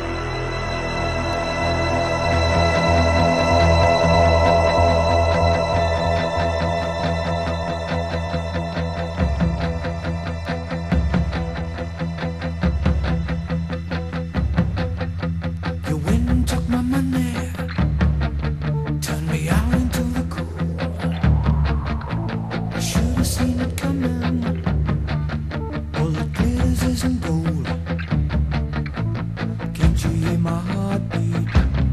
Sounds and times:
Music: 0:00.0 - 0:31.9.

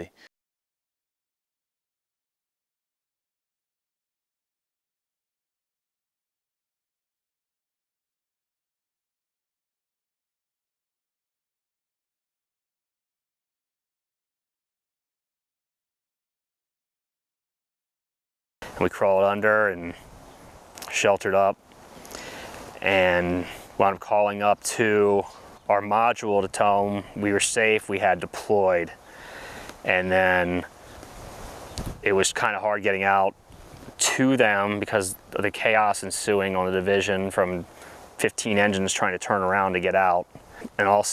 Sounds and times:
Speech: 0:00.0 - 0:00.2, 0:18.8 - 0:20.0, 0:20.8 - 0:21.6, 0:22.8 - 0:29.0, 0:29.9 - 0:30.7, 0:32.0 - 0:33.4, 0:34.0 - 0:41.1.

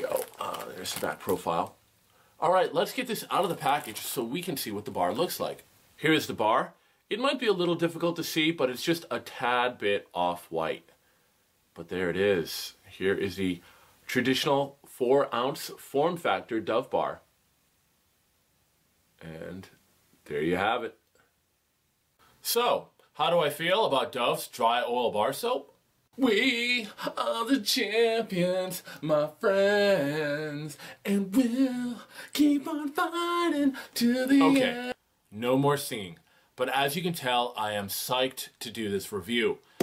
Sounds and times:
Speech: 0:00.0 - 0:01.8, 0:02.4 - 0:10.9, 0:11.8 - 0:17.3, 0:19.2 - 0:21.0, 0:22.4 - 0:27.8, 0:34.4 - 0:39.6.

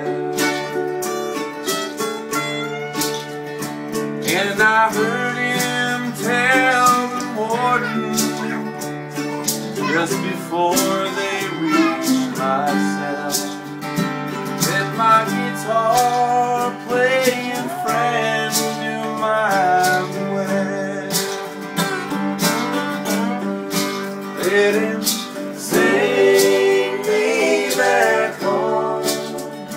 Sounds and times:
Rhythm and blues: 0:00.0 - 0:29.7.

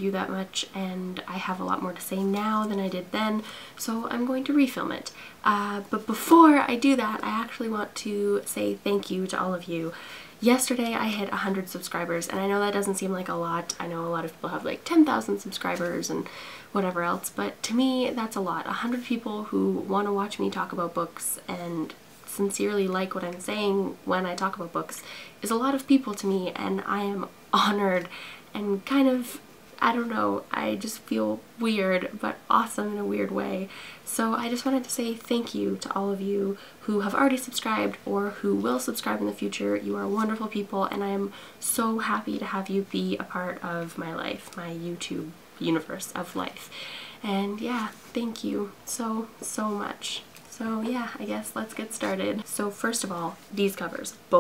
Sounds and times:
Speech: 0:00.0 - 0:54.4.

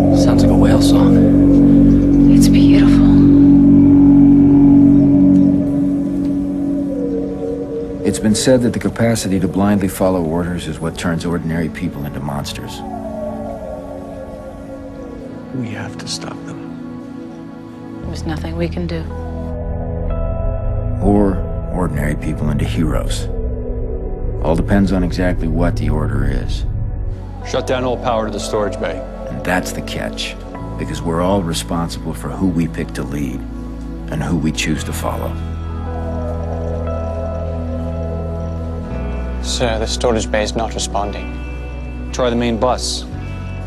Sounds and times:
Music: 0:00.0 - 0:43.6
Speech: 0:08.1 - 0:12.8, 0:21.0 - 0:23.3, 0:24.4 - 0:26.6, 0:27.5 - 0:33.4, 0:34.1 - 0:35.4, 0:39.4 - 0:41.3, 0:42.2 - 0:43.1.

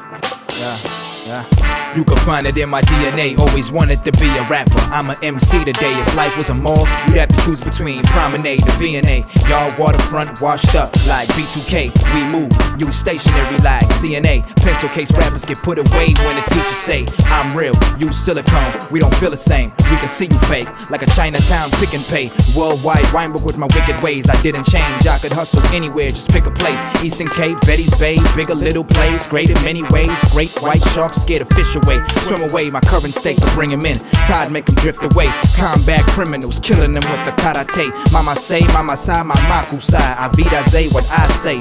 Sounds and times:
Soundtrack music: 0:00.0 - 0:41.6.

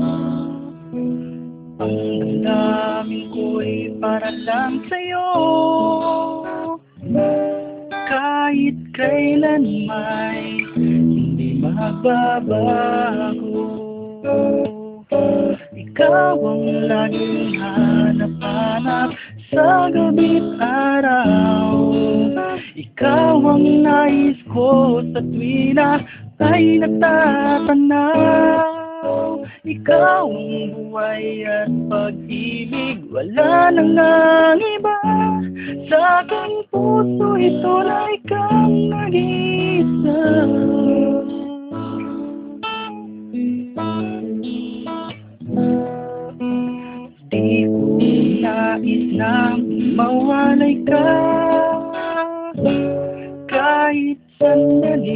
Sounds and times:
Acoustic guitar: 0:00.0 - 0:55.1.

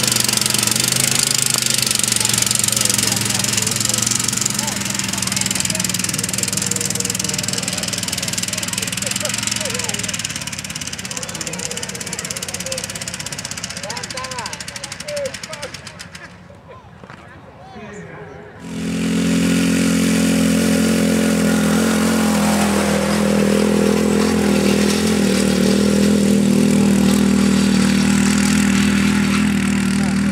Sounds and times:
Lawn mower: 0:00.0 - 0:16.2, 0:18.6 - 0:30.3
Vehicle: 0:00.0 - 0:30.3.

